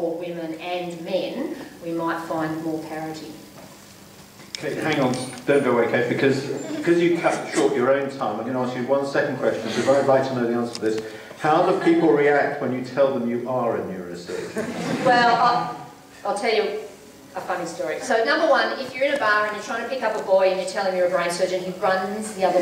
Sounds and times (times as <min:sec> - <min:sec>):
Male speech, man speaking: 0:04.6 - 0:14.6.